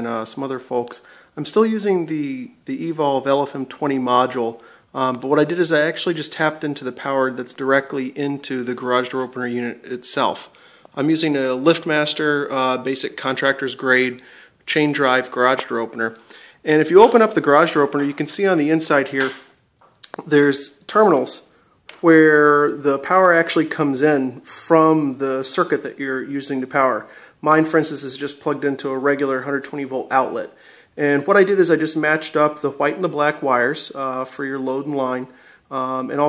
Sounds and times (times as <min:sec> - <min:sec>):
Speech: 0:00.0 - 0:19.4, 0:20.1 - 0:36.2.